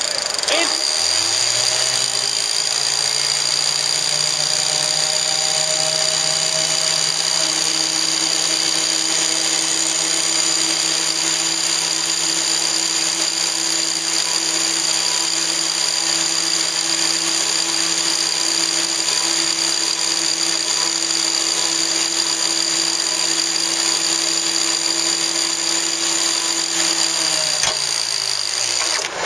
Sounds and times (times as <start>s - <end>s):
Engine: 0.0s - 29.2s.